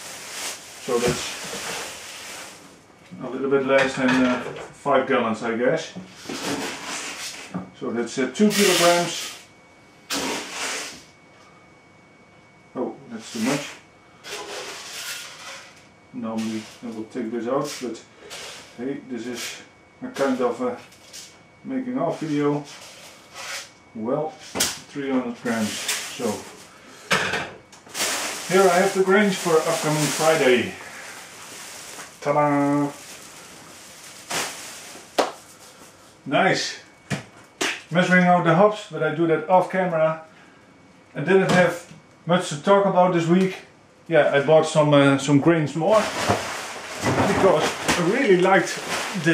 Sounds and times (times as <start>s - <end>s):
Inside, small room: 0.0s - 49.3s
Speech: 0.8s - 1.4s, 3.1s - 6.0s, 7.8s - 9.3s, 12.8s - 13.8s, 16.1s - 18.1s, 18.8s - 20.9s, 21.6s - 22.7s, 24.0s - 26.5s, 28.5s - 30.8s, 32.2s - 33.0s, 36.3s - 36.9s, 37.9s - 40.3s, 41.2s - 46.2s, 47.1s - 49.3s.